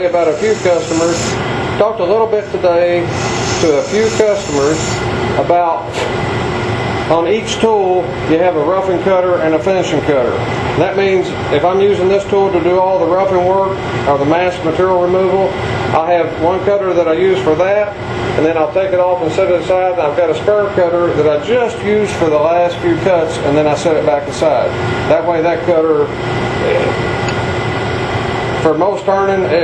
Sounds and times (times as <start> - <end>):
Speech: 0.0 - 6.1, 7.1 - 27.0, 28.6 - 29.6.